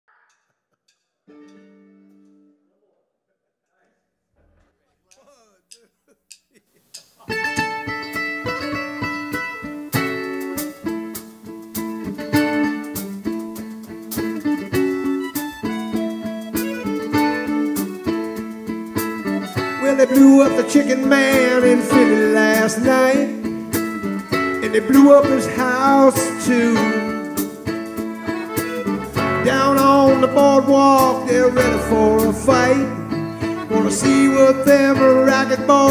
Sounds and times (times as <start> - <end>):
Mandolin: 7.2 - 35.9.